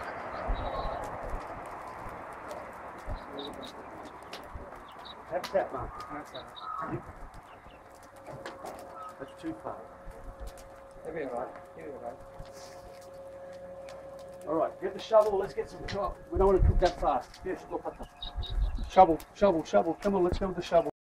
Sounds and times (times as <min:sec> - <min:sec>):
Speech: 0:03.2 - 0:04.0, 0:05.3 - 0:07.0, 0:09.2 - 0:09.9, 0:11.0 - 0:12.2, 0:14.4 - 0:18.1, 0:18.8 - 0:21.0.